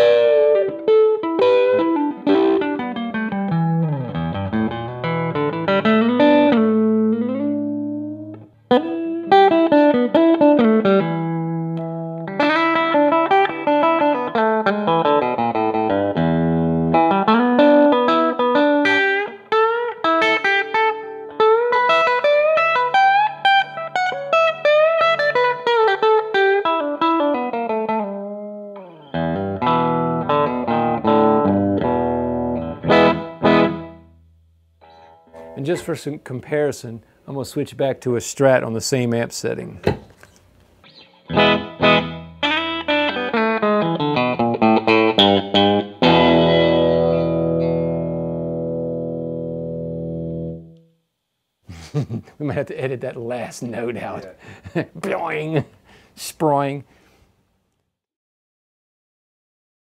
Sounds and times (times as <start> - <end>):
Guitar: 0.0 - 51.1, 51.7 - 57.9
Inside, small room: 0.0 - 58.0.